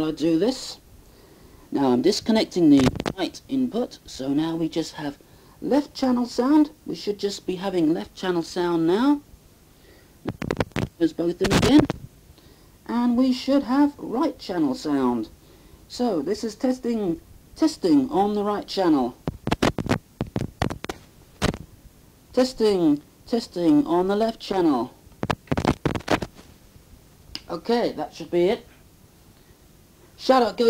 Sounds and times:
Speech: 0:00.0 - 0:00.8, 0:01.7 - 0:09.2, 0:11.0 - 0:12.0, 0:12.8 - 0:15.3, 0:15.9 - 0:19.2, 0:22.3 - 0:25.0, 0:27.4 - 0:28.7, 0:30.2 - 0:30.6.

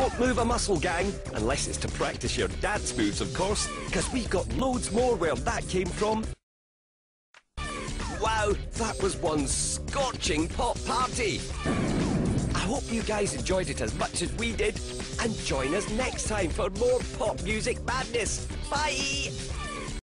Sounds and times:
Speech: 0:00.0 - 0:06.3, 0:08.2 - 0:11.4, 0:12.6 - 0:19.4
Music: 0:00.0 - 0:06.4, 0:07.6 - 0:20.0.

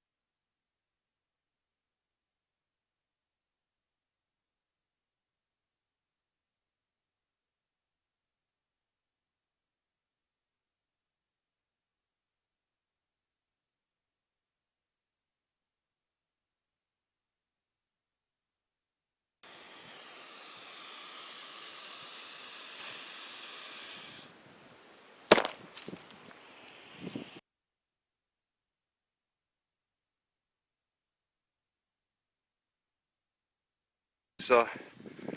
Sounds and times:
Outside, rural or natural: 0:00.0 - 0:35.3
Snake: 0:19.4 - 0:27.4.

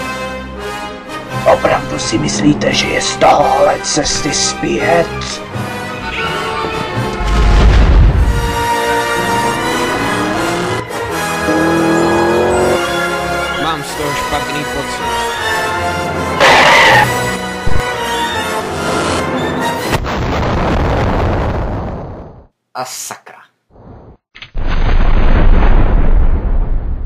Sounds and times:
Music: 0:00.0 - 0:20.1
Speech: 0:01.5 - 0:05.4, 0:13.6 - 0:15.1, 0:22.8 - 0:23.5.

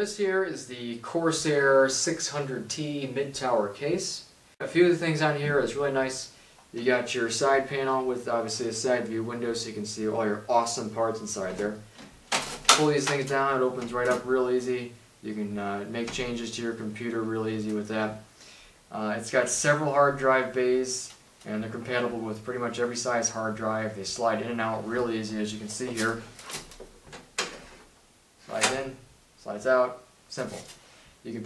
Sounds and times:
Speech: 0:00.0 - 0:11.9, 0:12.7 - 0:18.3, 0:18.9 - 0:26.3, 0:28.4 - 0:31.4.

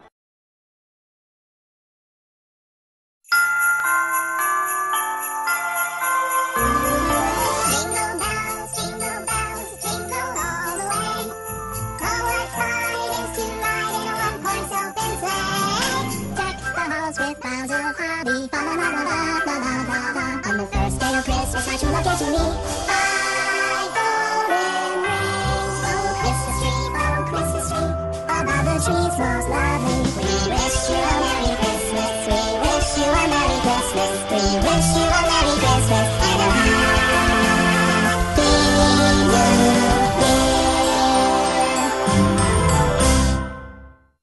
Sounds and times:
Music: 0:03.3 - 0:44.2.

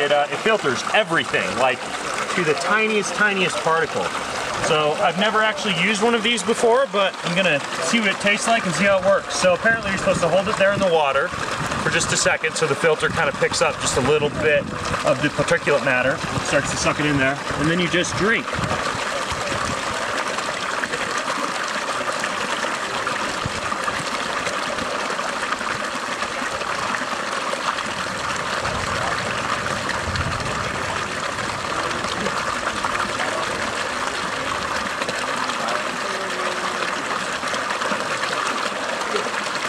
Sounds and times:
Stream: 0:00.0 - 0:39.6.

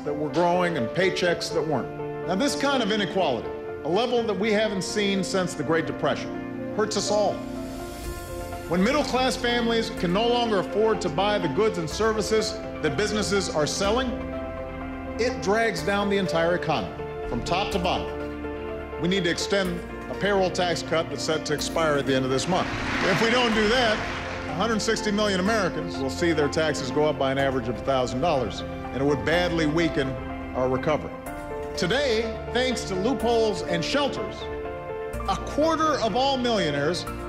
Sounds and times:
Male speech, man speaking: 0:00.0 - 0:07.4, 0:08.7 - 0:14.2, 0:15.2 - 0:18.2, 0:19.0 - 0:31.2, 0:31.8 - 0:34.5, 0:35.2 - 0:37.1
Music: 0:00.0 - 0:37.2.

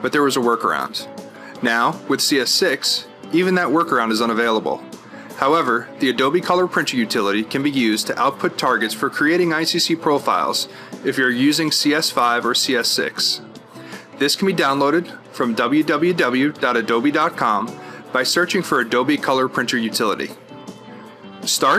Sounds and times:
Speech: 0:00.0 - 0:04.8, 0:05.4 - 0:13.4, 0:14.2 - 0:20.4, 0:21.4 - 0:21.7
Music: 0:00.0 - 0:21.7.

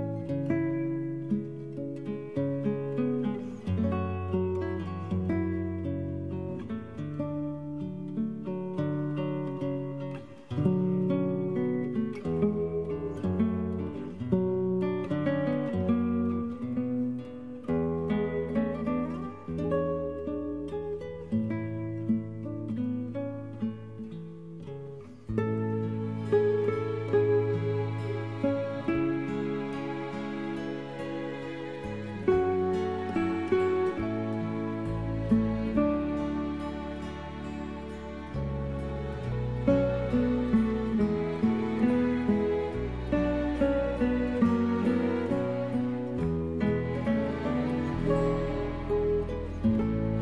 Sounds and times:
Music: 0:00.0 - 0:50.2.

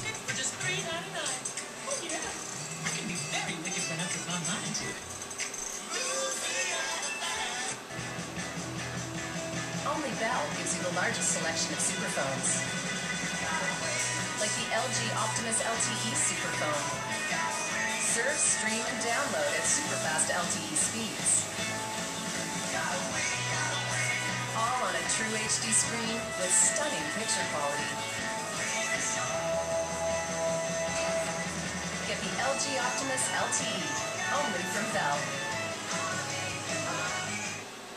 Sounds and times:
Speech: 0:00.0 - 0:05.0, 0:09.9 - 0:12.6, 0:14.4 - 0:17.0, 0:24.6 - 0:27.8, 0:32.1 - 0:35.3
Music: 0:00.0 - 0:37.9.

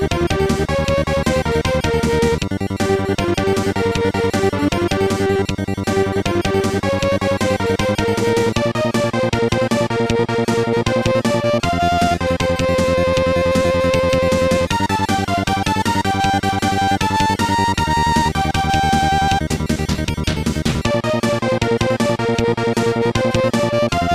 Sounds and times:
Video game music: 0:00.0 - 0:24.1.

